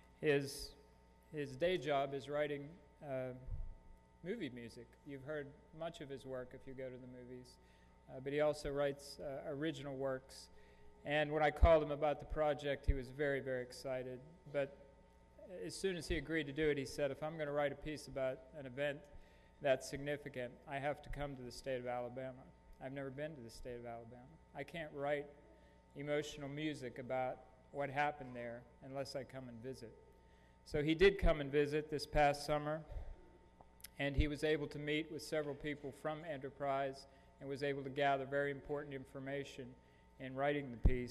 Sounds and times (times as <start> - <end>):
Speech: 0.2 - 14.8, 15.4 - 25.4, 26.0 - 30.0, 30.7 - 33.2, 33.8 - 41.1.